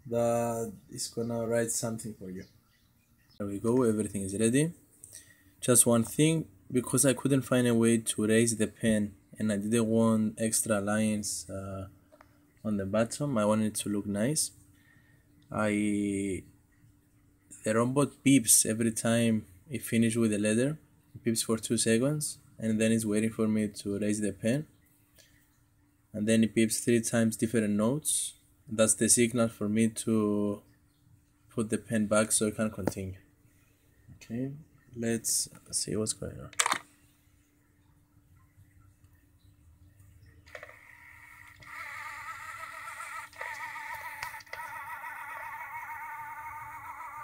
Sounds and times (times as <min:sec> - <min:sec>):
Speech: 0:00.0 - 0:02.5, 0:03.4 - 0:04.8, 0:05.6 - 0:11.9, 0:12.6 - 0:14.6, 0:15.5 - 0:16.5, 0:17.6 - 0:24.7, 0:26.2 - 0:30.6, 0:31.6 - 0:33.2, 0:34.2 - 0:36.6.